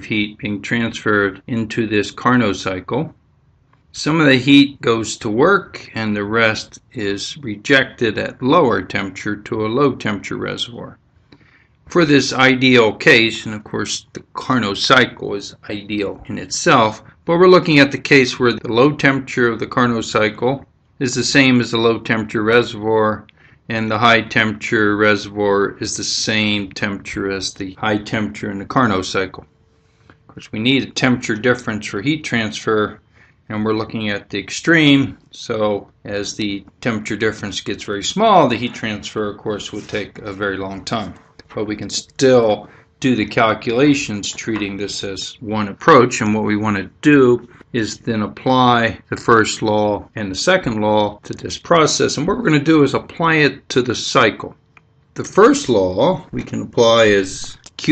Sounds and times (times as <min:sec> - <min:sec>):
Speech: 0:00.0 - 0:03.2, 0:03.9 - 0:11.0, 0:11.9 - 0:29.5, 0:30.3 - 0:54.6, 0:55.2 - 0:57.9.